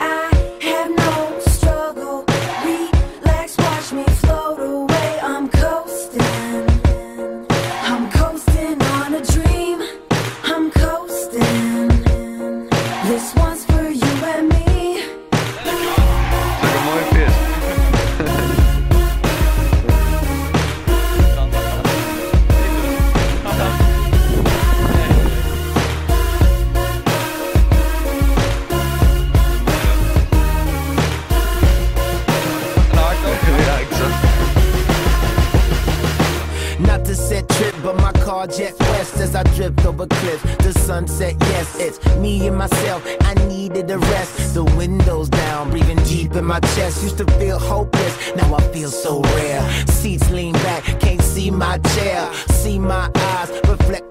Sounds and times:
Music: 0:00.0 - 0:54.1
Speech: 0:16.6 - 0:17.4, 0:21.2 - 0:23.9, 0:33.0 - 0:34.5.

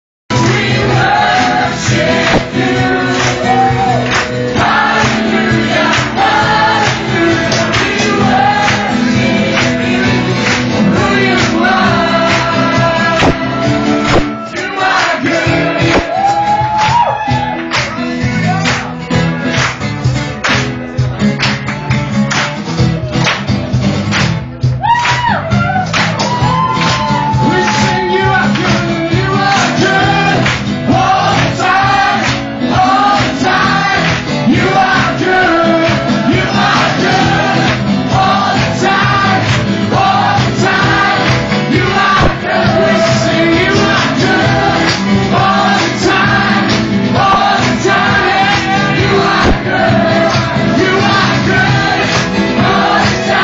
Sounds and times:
Singing: 0:00.3 - 0:17.5, 0:26.9 - 0:53.4
Music: 0:00.3 - 0:53.4.

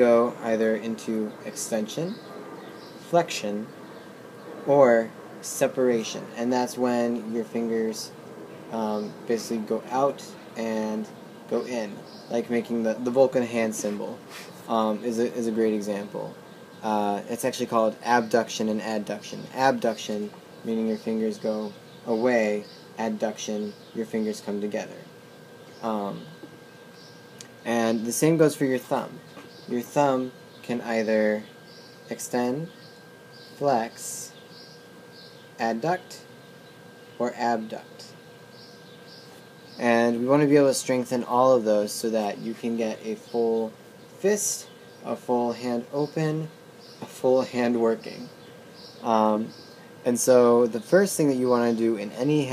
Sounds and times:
Speech: 0:00.0 - 0:02.2, 0:03.0 - 0:03.7, 0:04.7 - 0:25.1, 0:25.8 - 0:26.4, 0:27.6 - 0:31.5, 0:32.1 - 0:32.7, 0:33.6 - 0:34.4, 0:35.6 - 0:36.3, 0:37.2 - 0:38.2, 0:39.8 - 0:48.3, 0:49.0 - 0:52.5.

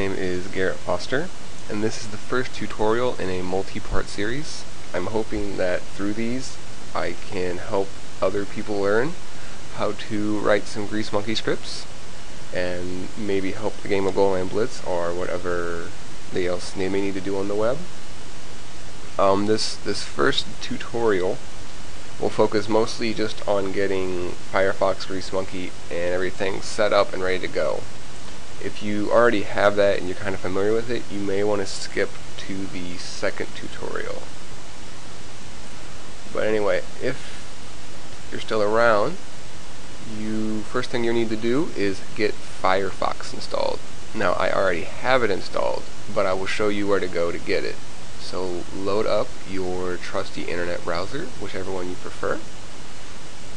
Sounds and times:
Speech: 0:00.0 - 0:11.9, 0:12.5 - 0:17.9, 0:19.2 - 0:21.4, 0:22.2 - 0:27.9, 0:28.6 - 0:34.3, 0:36.3 - 0:37.4, 0:38.3 - 0:39.3, 0:40.0 - 0:52.5.

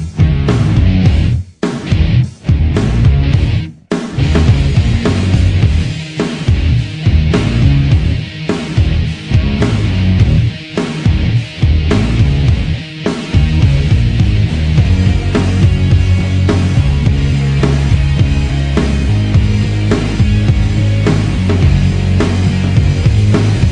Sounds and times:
Music: 0:00.0 - 0:23.7.

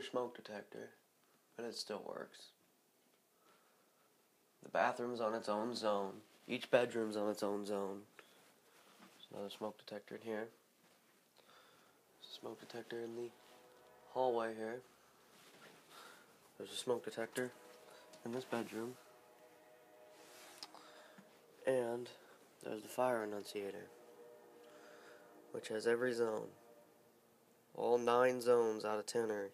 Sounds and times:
Speech: 0:00.0 - 0:01.0, 0:01.6 - 0:02.6, 0:04.6 - 0:08.1, 0:09.2 - 0:10.6, 0:12.2 - 0:13.4, 0:14.1 - 0:14.9, 0:16.6 - 0:17.6, 0:18.2 - 0:19.0, 0:21.6 - 0:23.9, 0:25.5 - 0:26.6, 0:27.8 - 0:29.5.

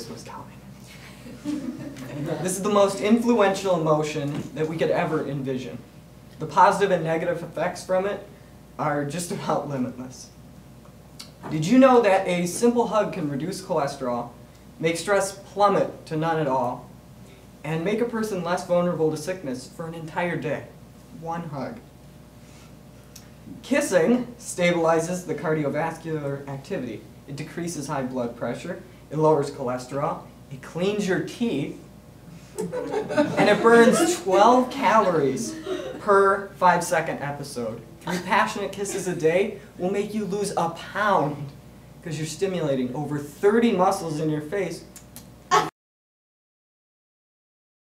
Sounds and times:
Male speech, man speaking: 0:00.0 - 0:00.6, 0:02.1 - 0:05.8, 0:06.4 - 0:10.4, 0:11.5 - 0:16.9, 0:17.6 - 0:21.8, 0:23.6 - 0:31.8, 0:33.4 - 0:44.9
Narration, monologue: 0:00.0 - 0:45.7.

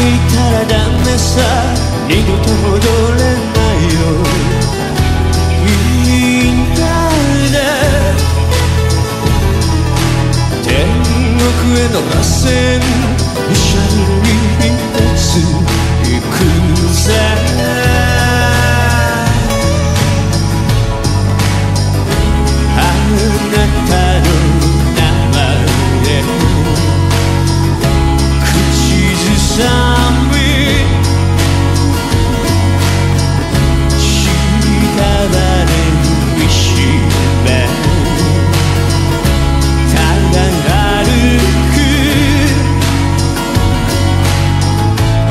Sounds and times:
Jingle (music): 0:00.0 - 0:45.3.

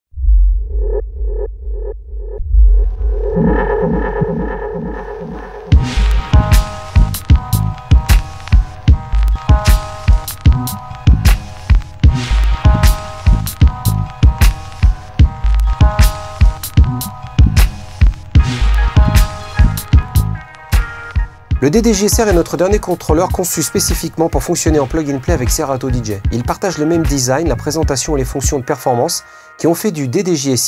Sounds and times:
Electronic music: 0:00.2 - 0:29.1.

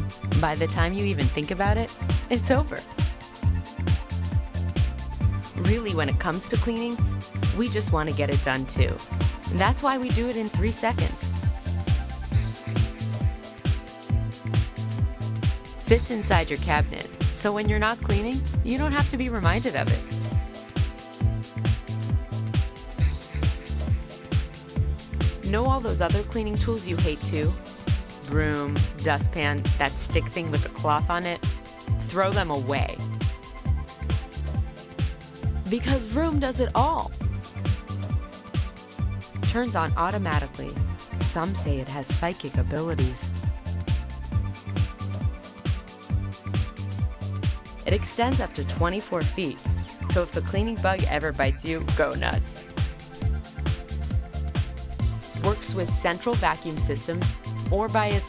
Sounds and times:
Music: 0:00.0 - 0:58.2
Speech: 0:00.4 - 0:02.9, 0:05.6 - 0:11.3, 0:15.9 - 0:20.0, 0:25.4 - 0:27.6, 0:28.2 - 0:31.4, 0:32.0 - 0:33.0, 0:35.7 - 0:37.1, 0:39.4 - 0:43.3, 0:47.9 - 0:52.6, 0:55.4 - 0:58.2.

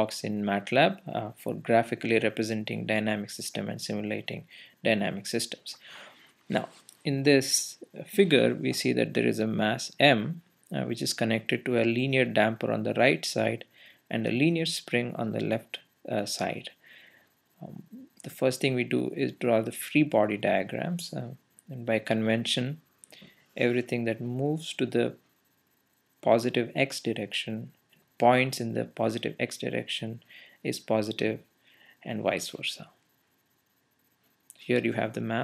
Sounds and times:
Speech: 0:00.0 - 0:05.8, 0:06.5 - 0:16.8, 0:17.6 - 0:22.8, 0:23.6 - 0:25.2, 0:26.2 - 0:31.4, 0:32.0 - 0:33.0, 0:34.5 - 0:35.4.

